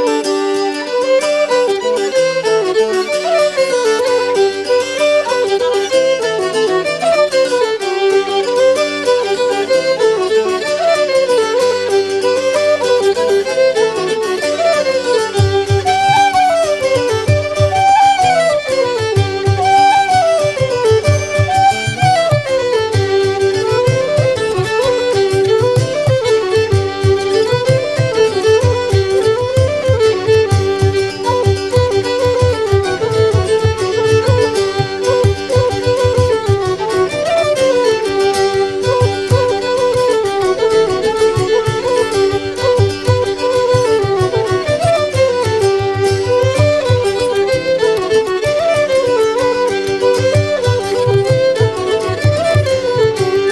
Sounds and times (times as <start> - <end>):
Violin, fiddle: 0.0 - 53.5.